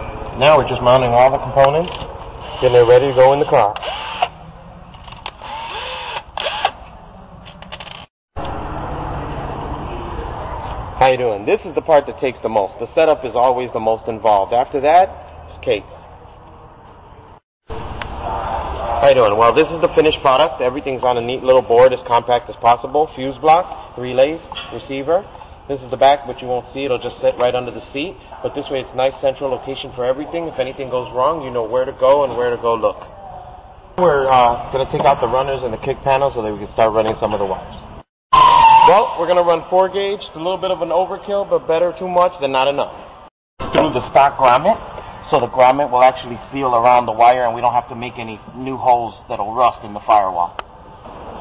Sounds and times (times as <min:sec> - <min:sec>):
Speech: 0:00.4 - 0:02.0, 0:02.6 - 0:03.8, 0:11.0 - 0:16.0, 0:19.0 - 0:37.8, 0:38.9 - 0:43.0, 0:43.7 - 0:50.6
Inside, large room or hall: 0:08.9 - 0:37.8.